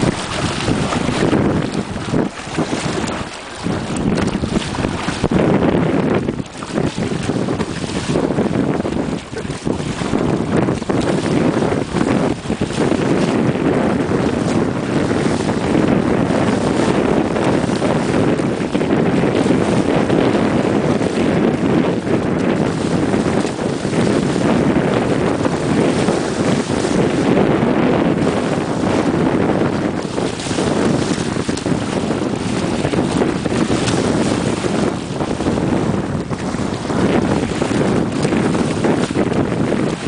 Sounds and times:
Wind noise (microphone): 0.0s - 40.0s.

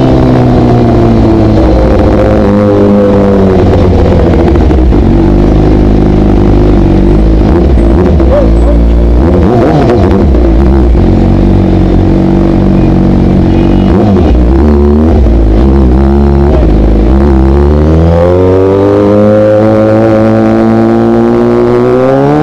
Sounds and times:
Motorcycle: 0.0s - 22.4s
Outside, urban or manmade: 0.0s - 22.4s
Speech: 8.2s - 8.9s.

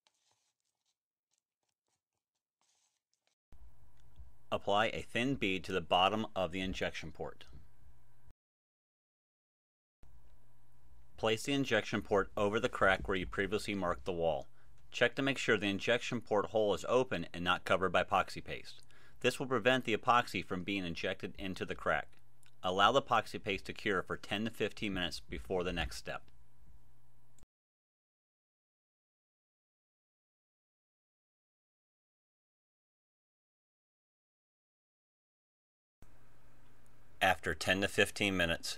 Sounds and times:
Speech: 4.5s - 7.6s, 11.2s - 26.3s, 37.2s - 38.7s.

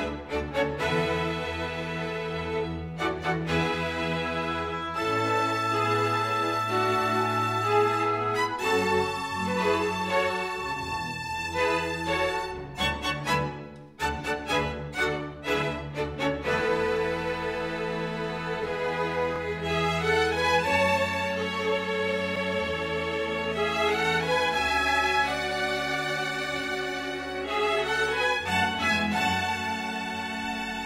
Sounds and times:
Music: 0.0s - 30.8s.

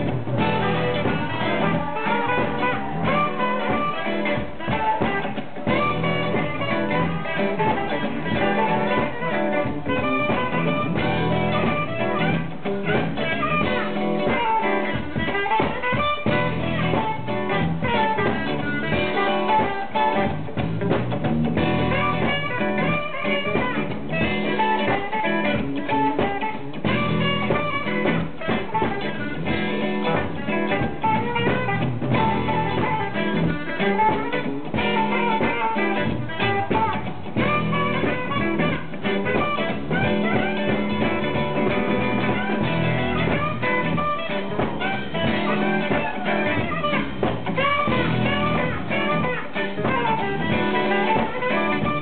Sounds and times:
Blues: 0.0s - 52.0s.

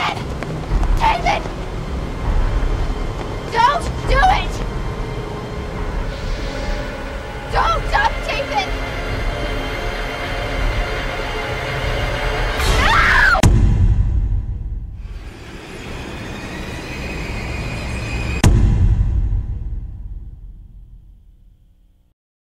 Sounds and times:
Music: 0.0s - 22.2s.

